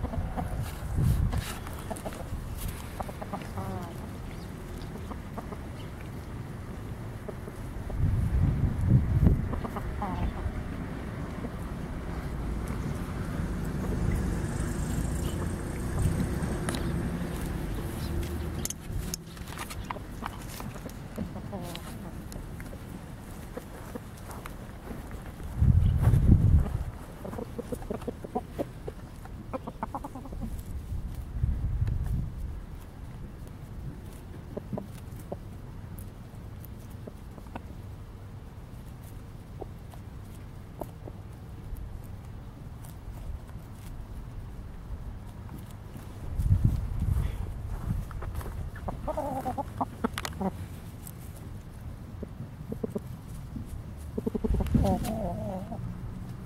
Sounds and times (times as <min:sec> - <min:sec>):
Cluck: 0:00.0 - 0:06.3, 0:07.2 - 0:08.0, 0:09.4 - 0:10.6, 0:19.8 - 0:22.8, 0:23.4 - 0:24.4, 0:26.6 - 0:30.7, 0:34.4 - 0:35.5, 0:36.9 - 0:37.8, 0:39.5 - 0:41.2, 0:48.8 - 0:50.7, 0:52.2 - 0:53.4, 0:54.1 - 0:55.8.